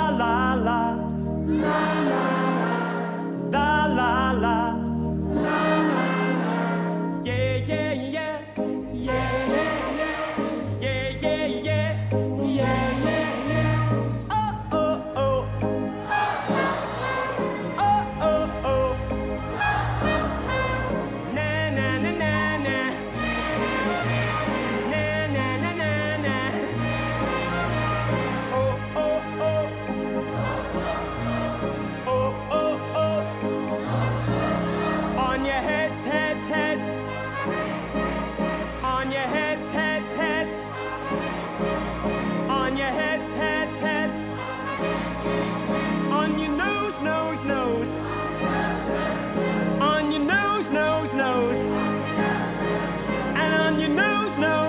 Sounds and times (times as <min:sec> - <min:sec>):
Orchestra: 0:00.0 - 0:54.6.